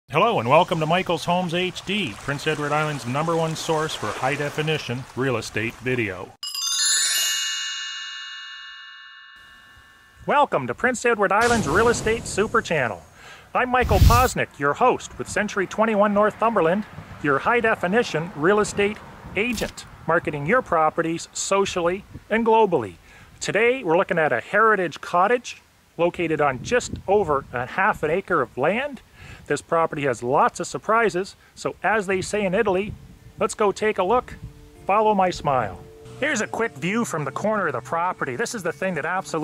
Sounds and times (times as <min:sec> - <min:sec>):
Speech: 0:00.1 - 0:06.4, 0:10.3 - 0:39.4
Music: 0:06.4 - 0:10.1, 0:33.8 - 0:39.4.